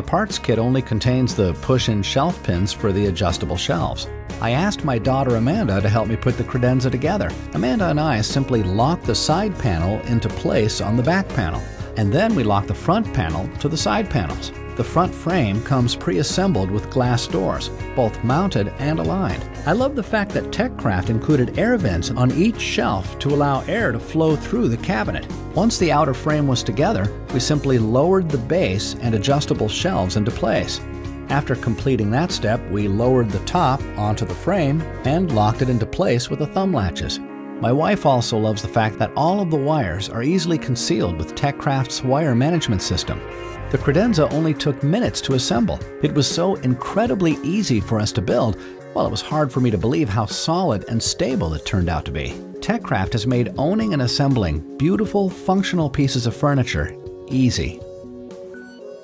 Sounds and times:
Speech: 0:00.0 - 0:57.8
Music: 0:00.0 - 0:59.0.

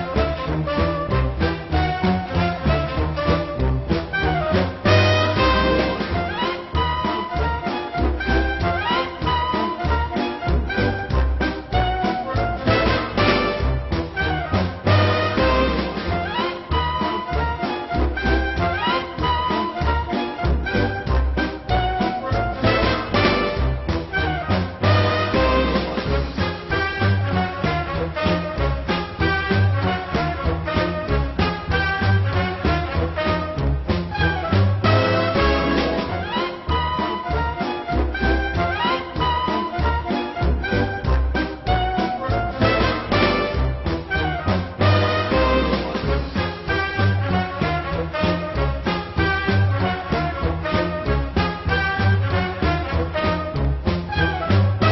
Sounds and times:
Music: 0:00.0 - 0:54.9.

